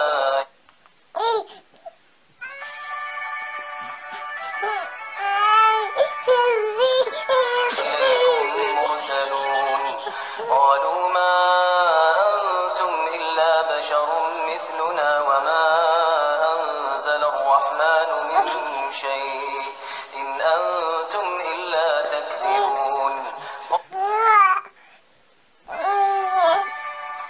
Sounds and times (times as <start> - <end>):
Baby cry, infant cry: 1.2 - 1.6, 4.4 - 10.6, 18.4 - 18.8, 23.7 - 24.7, 25.7 - 26.8.